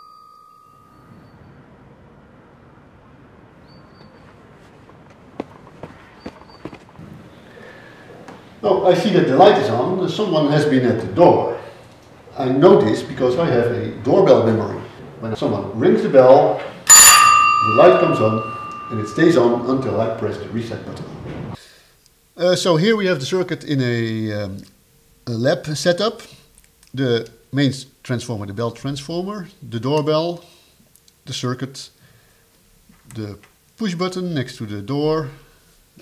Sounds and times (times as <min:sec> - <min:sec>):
Speech: 0:08.6 - 0:11.7, 0:12.3 - 0:16.7, 0:17.6 - 0:21.1, 0:22.4 - 0:24.7, 0:25.3 - 0:30.5, 0:31.2 - 0:32.0, 0:33.1 - 0:35.4.